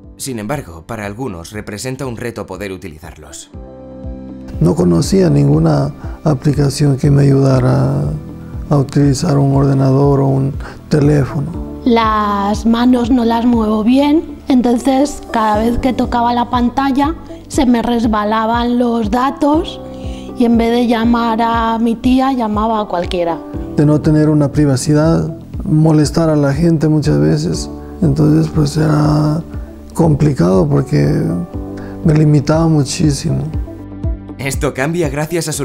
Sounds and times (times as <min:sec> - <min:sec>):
Music: 0:00.0 - 0:35.6.